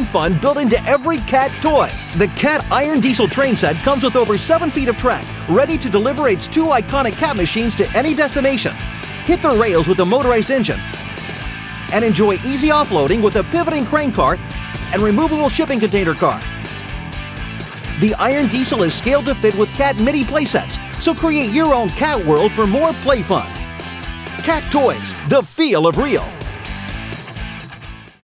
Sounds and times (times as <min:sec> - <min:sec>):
Speech: 0:00.0 - 0:10.8, 0:11.9 - 0:16.5, 0:18.0 - 0:23.6, 0:24.4 - 0:26.4
Music: 0:00.0 - 0:28.2.